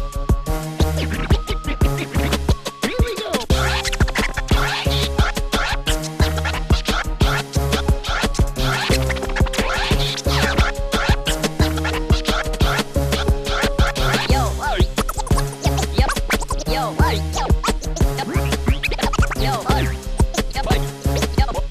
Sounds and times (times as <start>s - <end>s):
Music: 0.0s - 21.7s.